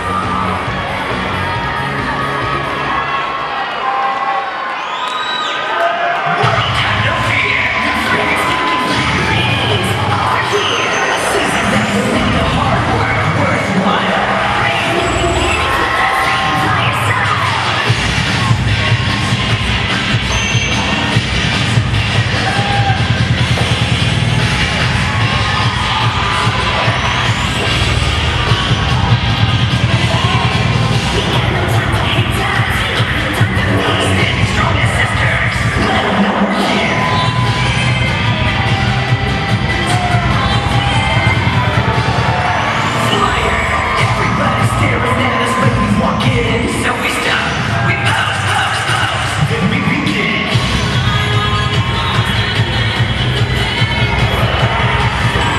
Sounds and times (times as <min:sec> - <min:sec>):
Music: 0:00.0 - 0:03.8, 0:06.3 - 0:55.5.